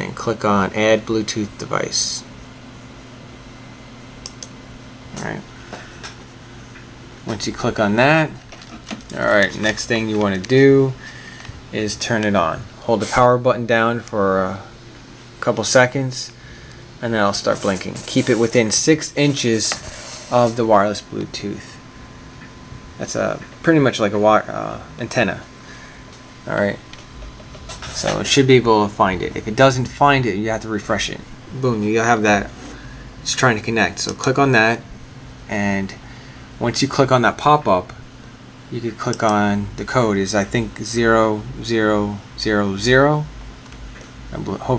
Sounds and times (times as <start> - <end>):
Speech: 0.0 - 2.3, 5.1 - 5.5, 7.2 - 8.4, 9.1 - 11.0, 11.7 - 14.7, 15.4 - 16.4, 17.0 - 21.8, 23.0 - 25.5, 26.5 - 26.8, 27.8 - 32.6, 33.2 - 34.8, 35.5 - 36.0, 36.6 - 38.0, 38.7 - 43.3, 44.3 - 44.7.